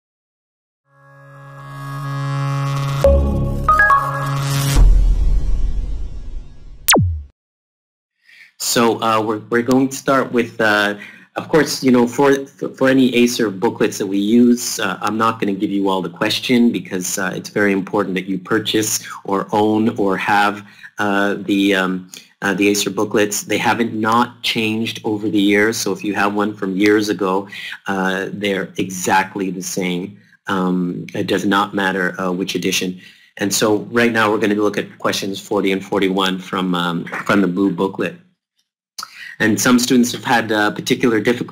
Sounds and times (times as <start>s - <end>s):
Music: 0.9s - 6.7s
Speech: 8.3s - 38.2s, 39.0s - 41.5s.